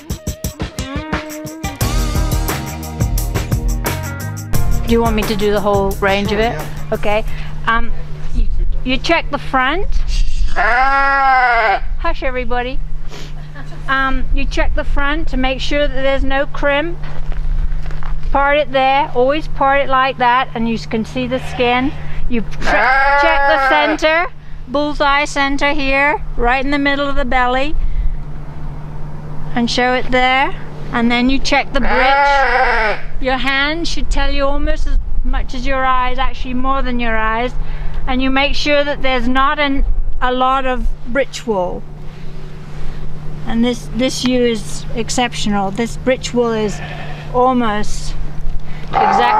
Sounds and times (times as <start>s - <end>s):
Speech: 4.9s - 10.5s, 12.0s - 12.8s, 13.9s - 17.0s, 18.3s - 27.8s, 29.6s - 32.2s, 33.2s - 41.8s, 43.5s - 48.2s, 49.0s - 49.3s
Bleat: 10.5s - 11.9s, 21.3s - 24.2s, 31.8s - 33.1s, 46.6s - 47.4s, 48.9s - 49.3s.